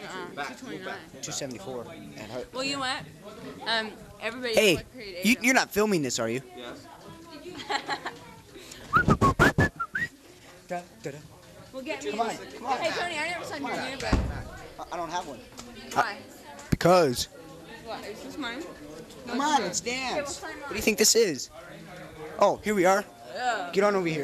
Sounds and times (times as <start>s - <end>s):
Whistling: 8.9s - 10.2s.